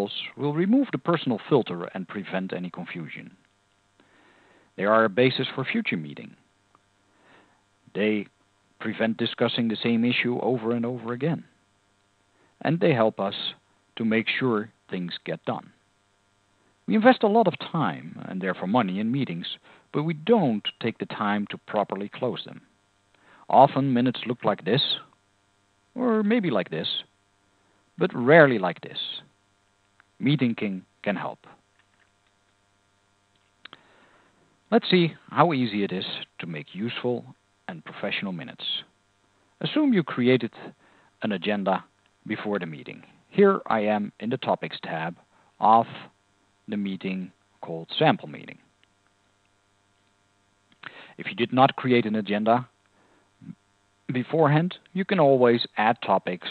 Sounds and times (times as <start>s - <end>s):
Speech: 0.0s - 3.4s, 4.8s - 6.4s, 7.9s - 11.5s, 12.6s - 15.8s, 16.9s - 22.7s, 23.5s - 25.1s, 26.0s - 27.1s, 28.0s - 29.3s, 30.2s - 31.6s, 34.7s - 38.9s, 39.6s - 48.6s, 50.8s - 52.7s, 53.4s - 56.5s.